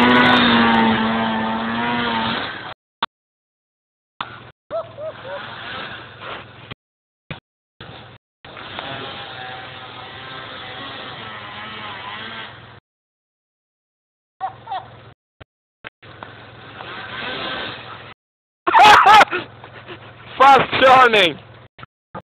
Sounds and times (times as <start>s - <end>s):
Speech: 20.4s - 21.4s.